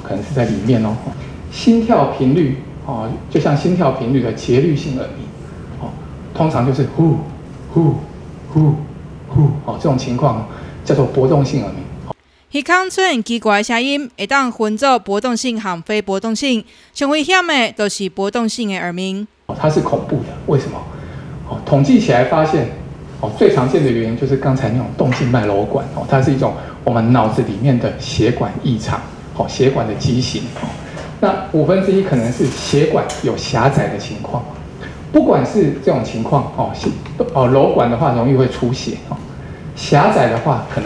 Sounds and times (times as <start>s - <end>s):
Speech: 0.0s - 11.9s, 12.5s - 20.9s, 21.5s - 40.8s.